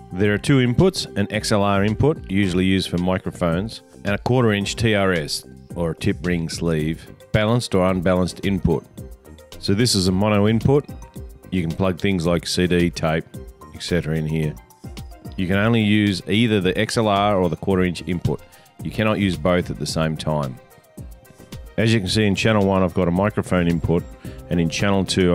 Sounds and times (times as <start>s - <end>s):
Music: 0.0s - 25.3s
Speech: 0.1s - 8.9s, 9.6s - 10.9s, 11.5s - 14.6s, 15.4s - 20.6s, 21.8s - 25.3s.